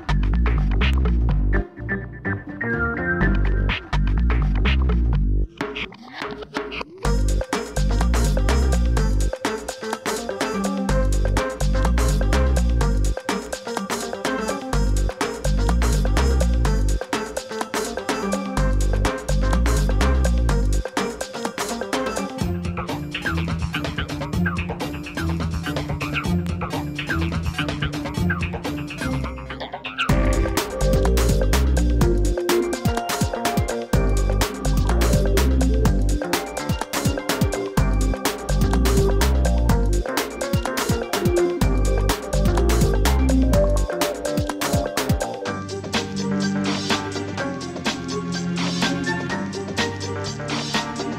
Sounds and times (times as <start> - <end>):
Music: 0.0 - 51.1.